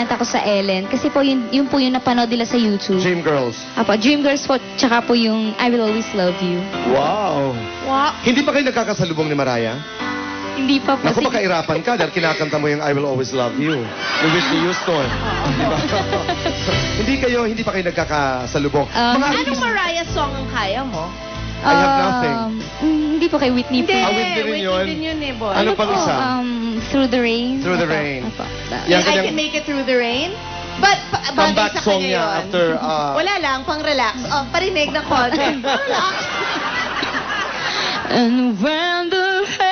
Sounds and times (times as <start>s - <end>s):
Music: 0.0s - 39.7s.